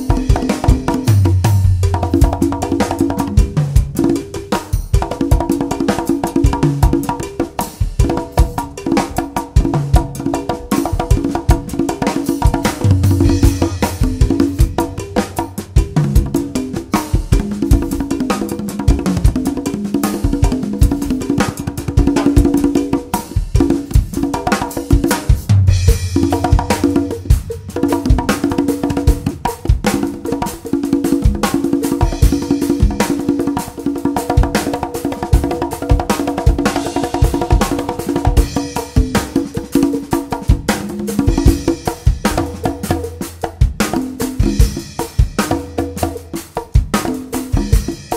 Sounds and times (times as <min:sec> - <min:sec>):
Percussion: 0:00.0 - 0:48.1.